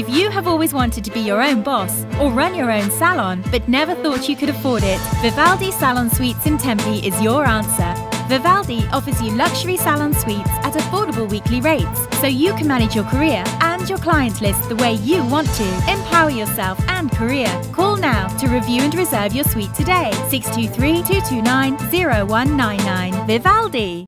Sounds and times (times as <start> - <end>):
Music: 0.0 - 24.0
Speech: 0.0 - 24.0.